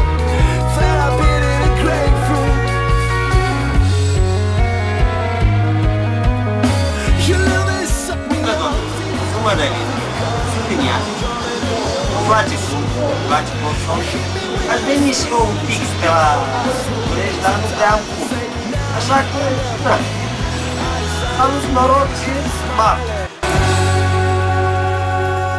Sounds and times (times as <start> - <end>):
Music: 0.0 - 25.5
Speech: 7.2 - 20.2, 21.3 - 23.4.